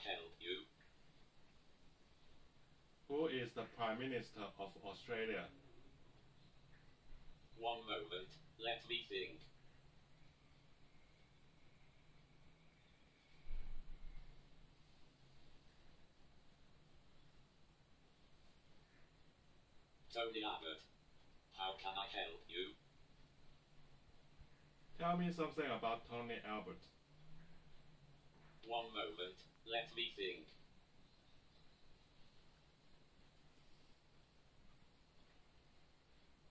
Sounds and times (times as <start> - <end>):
Male speech, man speaking: 0.0 - 0.7, 3.1 - 5.6, 7.6 - 9.5, 20.1 - 20.9, 21.6 - 22.8, 25.0 - 26.9, 28.6 - 30.6
Narration, monologue: 2.4 - 10.1, 19.4 - 30.7.